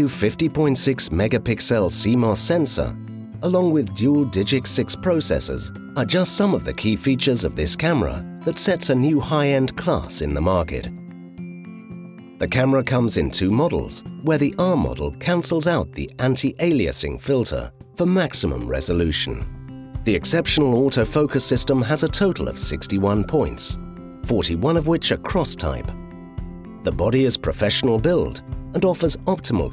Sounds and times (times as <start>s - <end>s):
Speech: 0.0s - 10.9s, 12.4s - 19.4s, 20.1s - 26.0s, 26.8s - 29.7s
Music: 0.0s - 29.7s.